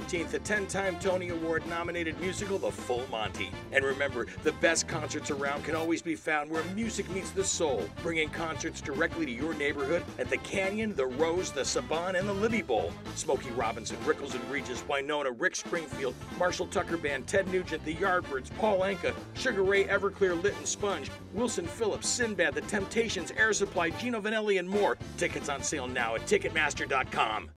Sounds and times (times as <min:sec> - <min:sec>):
Music: 0:00.0 - 0:27.5
Speech: 0:00.0 - 0:27.5.